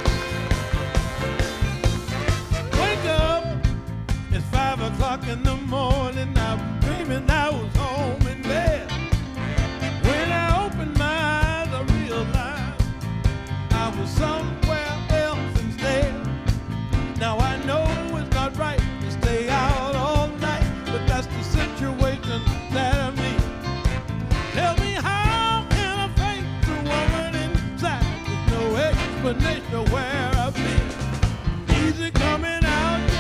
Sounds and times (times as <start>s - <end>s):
Music: 0.0s - 33.2s.